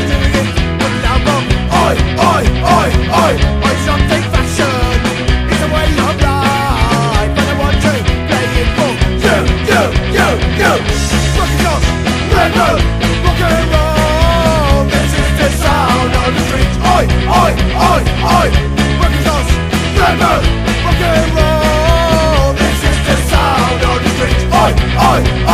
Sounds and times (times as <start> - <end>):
Music: 0.0 - 25.5.